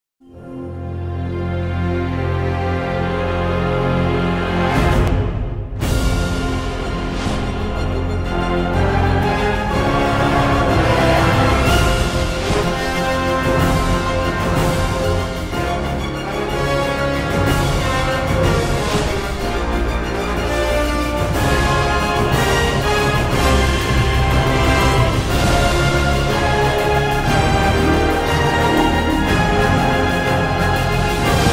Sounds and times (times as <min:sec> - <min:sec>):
Theme music: 0:00.2 - 0:31.5.